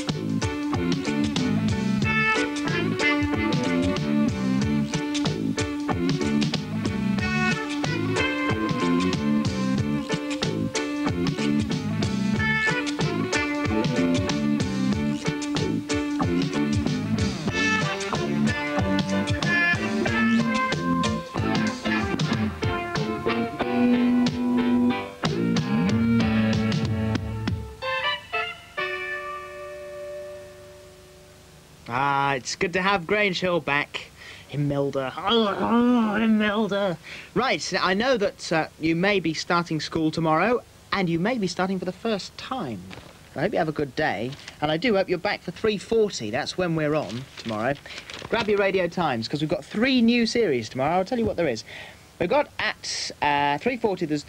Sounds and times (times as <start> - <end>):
Music: 0.0 - 31.8.